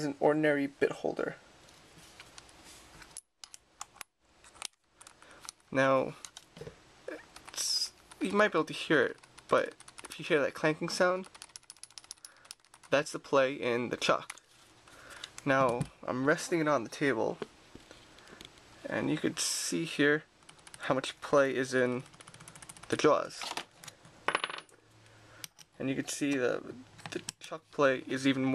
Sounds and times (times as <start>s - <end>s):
Speech: 0.0s - 1.4s, 5.7s - 6.2s, 7.1s - 11.3s, 12.9s - 14.3s, 15.4s - 17.4s, 18.8s - 22.0s, 22.9s - 23.5s, 25.8s - 28.5s.